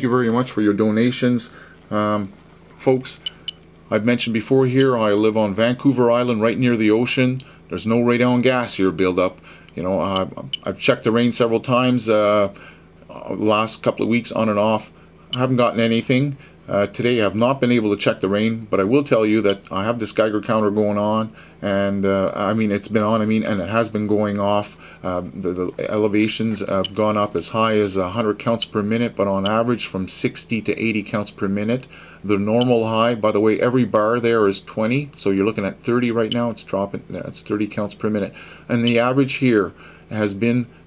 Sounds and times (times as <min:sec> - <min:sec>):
Speech: 0:00.0 - 0:03.3, 0:03.9 - 0:40.7.